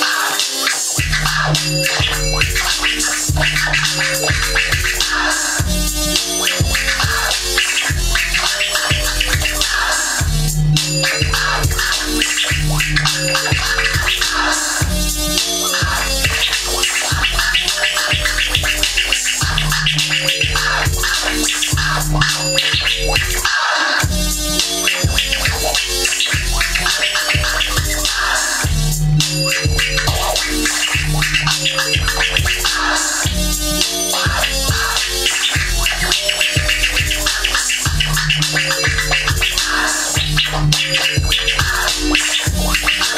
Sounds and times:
Scratching (performance technique): 0.0s - 43.1s.

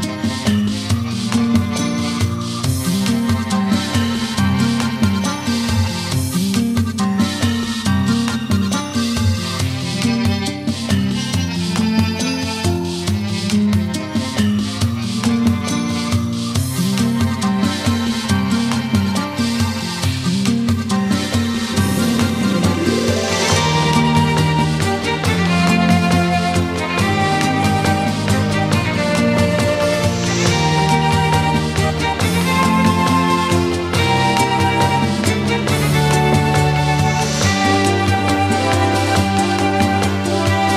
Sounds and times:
Music: 0.0s - 40.7s.

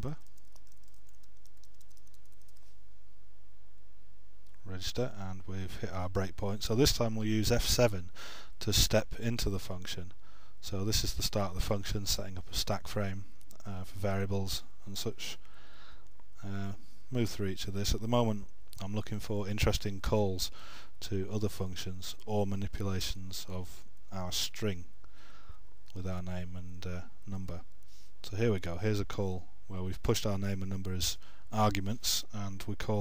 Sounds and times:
Speech: 0.0s - 0.2s, 4.6s - 15.4s, 16.4s - 24.9s, 25.9s - 33.0s.

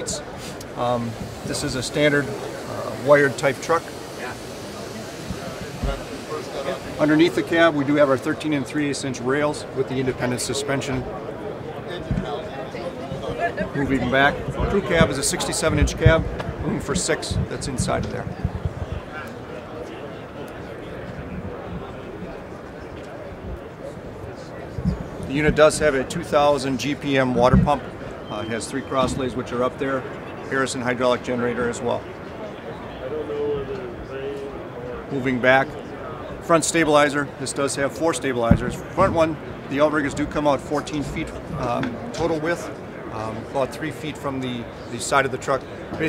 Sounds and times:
Speech: 0.0s - 18.4s, 24.3s - 32.0s, 32.9s - 46.0s.

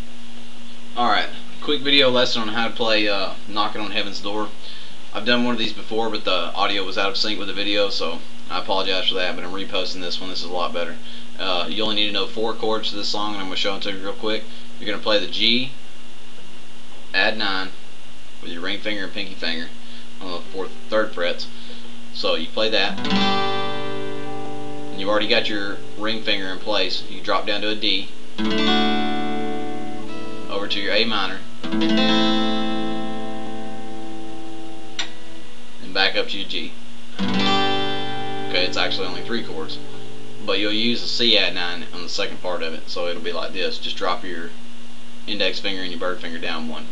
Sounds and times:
Speech: 1.0s - 15.8s, 17.1s - 17.8s, 18.4s - 23.0s, 25.0s - 28.1s, 30.5s - 31.5s, 35.8s - 36.8s, 38.5s - 44.6s, 45.3s - 46.9s
Music: 22.9s - 26.2s, 28.4s - 35.5s, 37.2s - 40.5s.

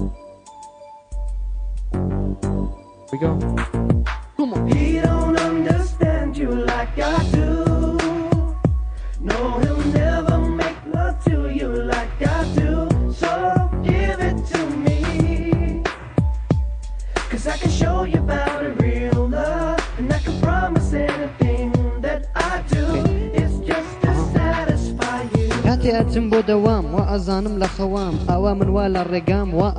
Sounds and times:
Music: 0.0s - 29.7s.

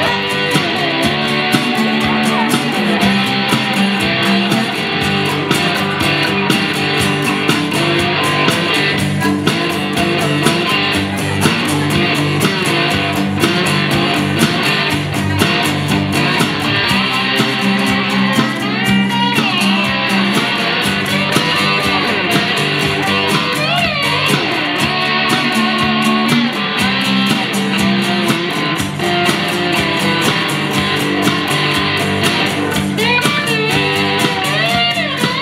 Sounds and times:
Electric guitar: 0.0s - 35.4s.

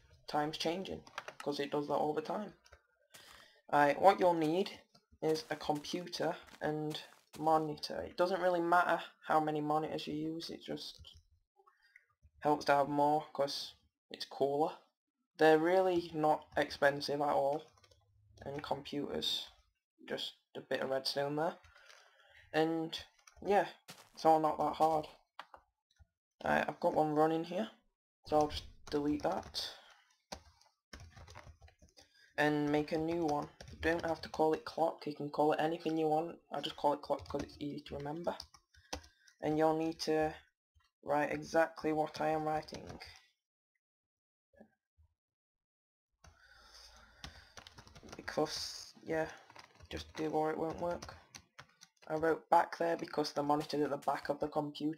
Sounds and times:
Speech: 0.3s - 2.6s, 3.7s - 11.1s, 12.4s - 14.8s, 15.4s - 17.7s, 18.4s - 21.6s, 22.6s - 25.2s, 26.4s - 29.8s, 32.4s - 38.4s, 39.4s - 40.4s, 41.1s - 43.2s, 48.1s - 51.2s, 52.1s - 54.9s.

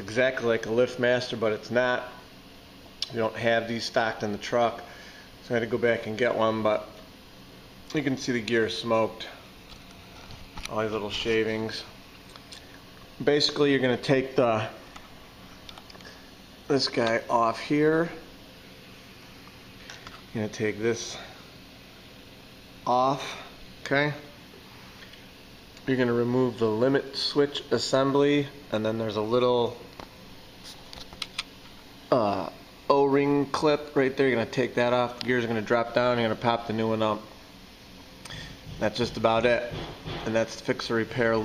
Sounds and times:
Speech: 0.0s - 2.2s, 3.0s - 7.0s, 7.9s - 9.5s, 10.6s - 12.0s, 13.2s - 14.8s, 16.7s - 18.3s, 20.3s - 21.4s, 22.8s - 24.4s, 25.8s - 29.8s, 32.1s - 37.3s, 38.8s - 41.4s.

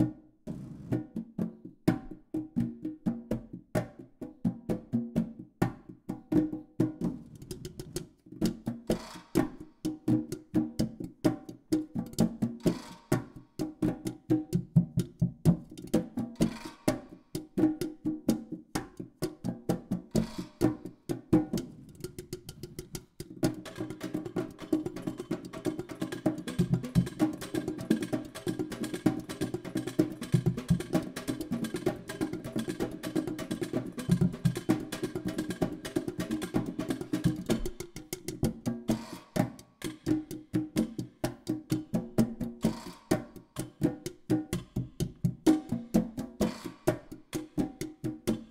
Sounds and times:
Music: 0.0s - 48.5s.

